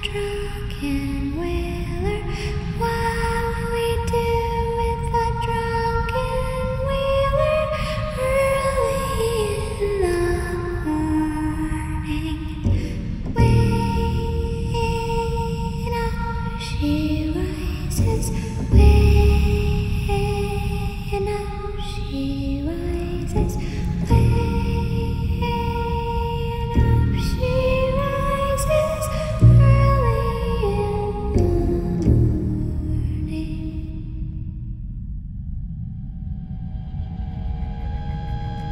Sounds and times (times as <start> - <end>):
Lullaby: 0.0 - 34.3.